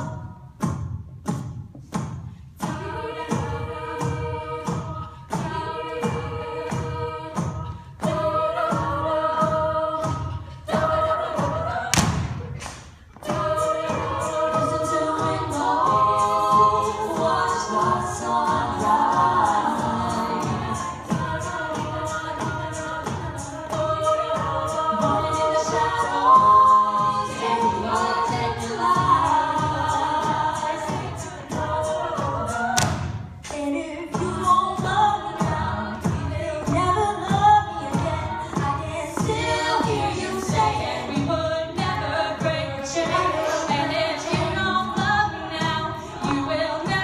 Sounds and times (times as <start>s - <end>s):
Singing: 0.0s - 0.7s, 2.6s - 47.0s
A capella: 0.0s - 47.0s
Thump, thud: 11.9s - 12.4s.